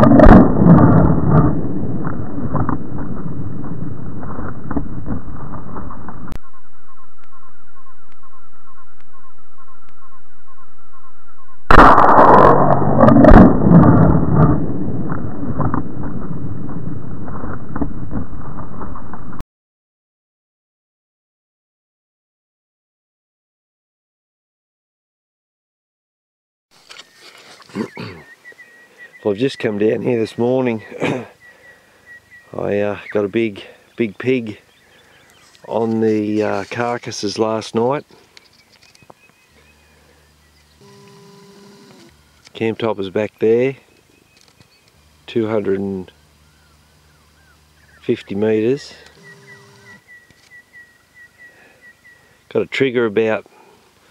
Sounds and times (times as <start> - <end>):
Animal: 26.9 - 41.2.